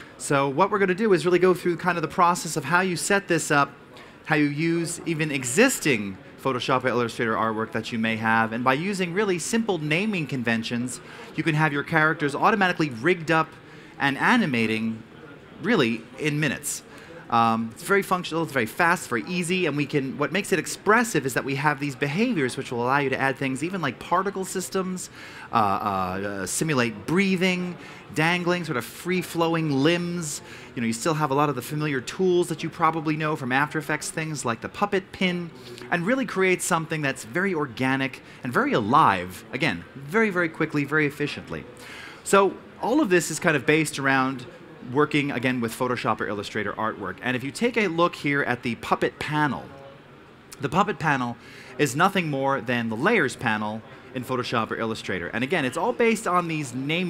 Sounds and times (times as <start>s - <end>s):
Speech: 0.0s - 57.0s.